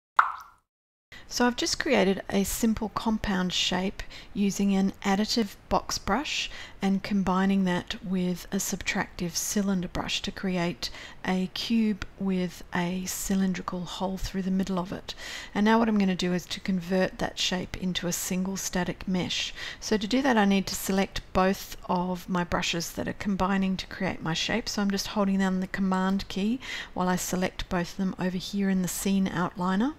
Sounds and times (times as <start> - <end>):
Plop: 0.2 - 0.6
Speech: 1.3 - 29.9.